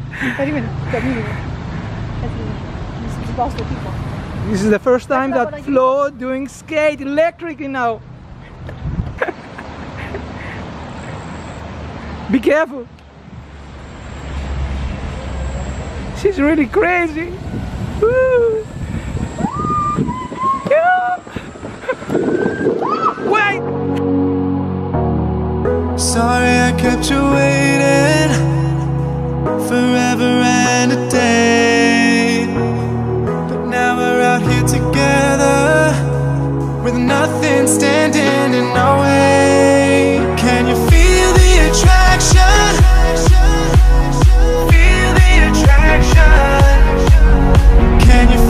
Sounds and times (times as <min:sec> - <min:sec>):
Music: 0:23.6 - 0:48.4.